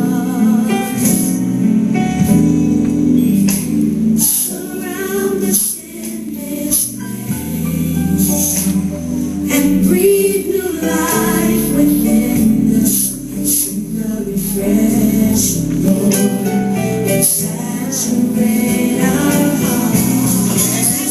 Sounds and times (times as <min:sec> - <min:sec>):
Music: 0:00.0 - 0:21.1.